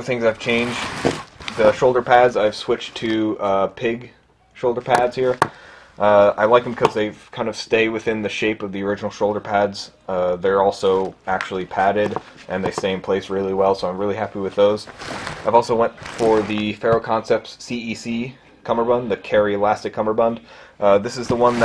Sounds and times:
Speech: 0:00.0 - 0:00.9, 0:01.5 - 0:05.4, 0:06.0 - 0:21.6.

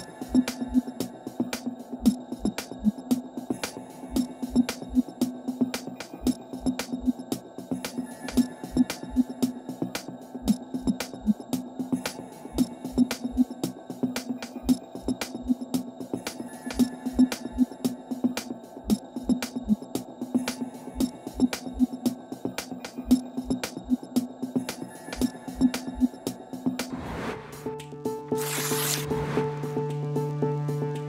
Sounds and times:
Music: 0:00.0 - 0:31.0.

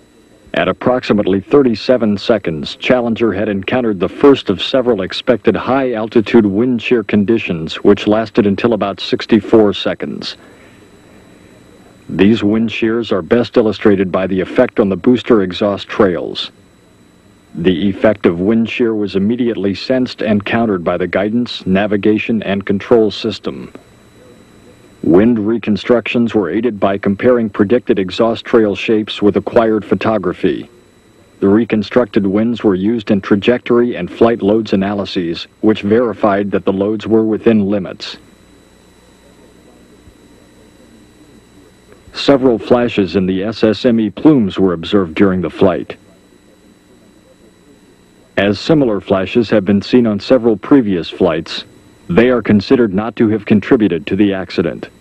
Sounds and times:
Speech: 0:00.2 - 0:10.4, 0:11.6 - 0:55.0.

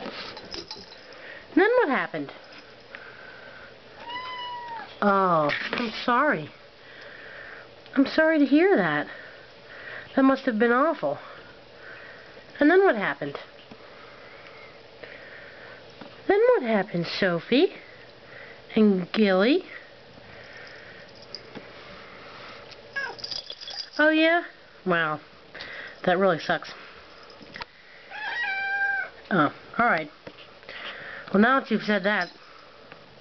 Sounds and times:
Speech: 0:01.6 - 0:02.4, 0:08.0 - 0:09.2, 0:12.6 - 0:13.5, 0:16.3 - 0:17.8, 0:26.0 - 0:26.8, 0:31.3 - 0:32.3
Cat: 0:04.0 - 0:05.0, 0:23.0 - 0:23.2, 0:28.1 - 0:29.2.

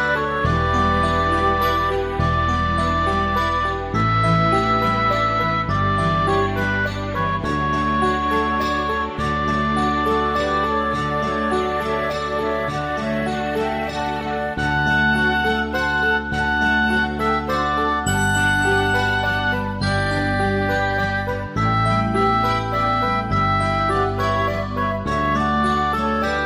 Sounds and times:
Music: 0:00.0 - 0:26.4.

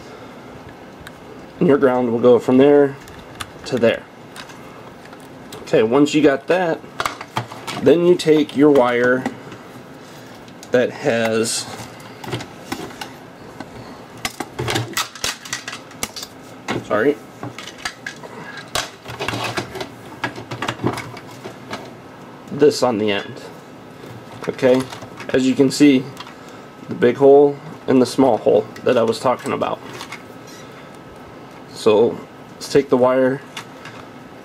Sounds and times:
Inside, small room: 0:00.0 - 0:34.4
Speech: 0:01.6 - 0:03.0, 0:03.7 - 0:04.1, 0:05.6 - 0:06.8, 0:07.8 - 0:09.3, 0:10.7 - 0:11.8, 0:16.8 - 0:17.2, 0:22.5 - 0:23.6, 0:24.4 - 0:26.2, 0:26.9 - 0:29.9, 0:31.7 - 0:33.5.

